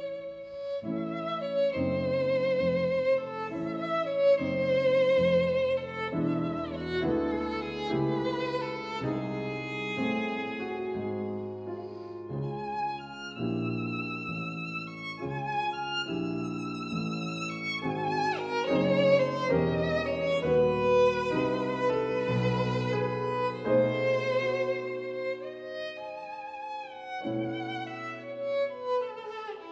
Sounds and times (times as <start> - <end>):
Violin, fiddle: 0.0 - 29.7.